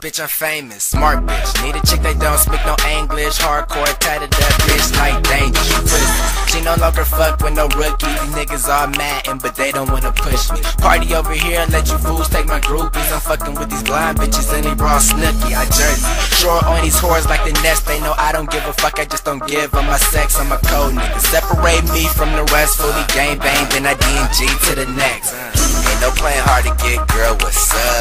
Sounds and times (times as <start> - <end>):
Music: 0.9 - 28.0.